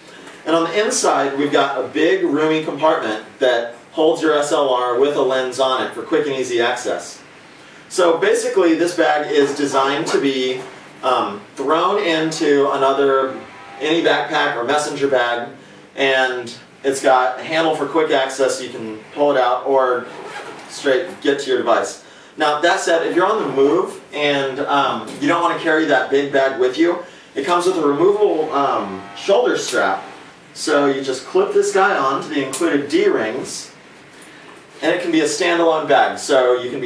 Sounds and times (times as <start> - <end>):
Speech: 0.4 - 7.3, 7.9 - 33.8, 34.7 - 36.8.